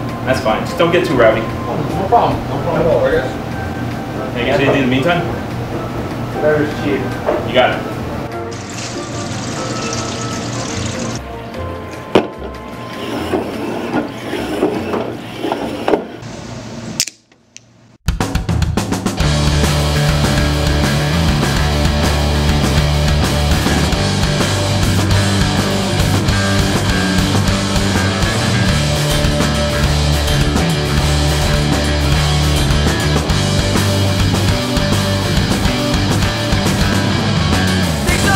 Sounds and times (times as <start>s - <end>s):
Music: 0.0s - 15.8s, 18.1s - 38.3s.